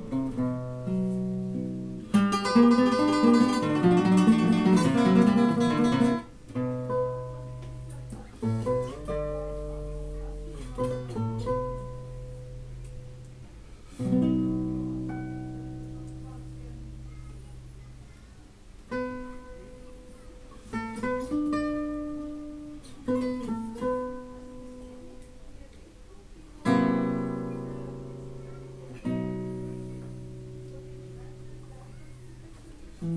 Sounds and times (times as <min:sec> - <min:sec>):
Strum: 0:00.0 - 0:18.0, 0:26.6 - 0:33.1
Acoustic guitar: 0:00.0 - 0:33.1.